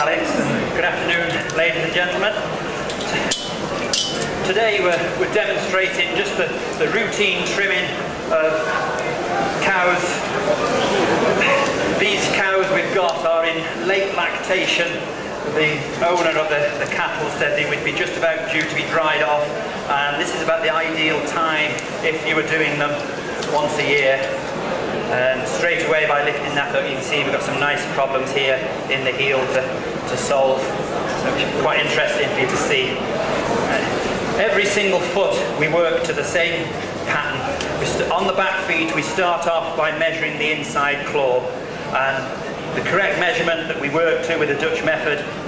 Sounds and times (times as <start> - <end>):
Speech: 0.0 - 2.6, 4.3 - 45.4.